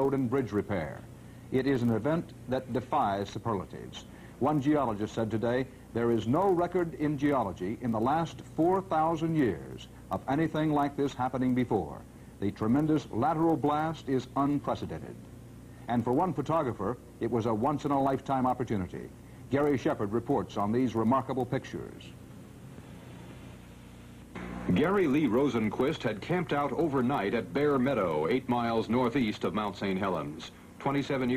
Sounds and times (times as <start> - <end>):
Speech: 0.0 - 15.2, 15.9 - 22.2, 24.7 - 31.3.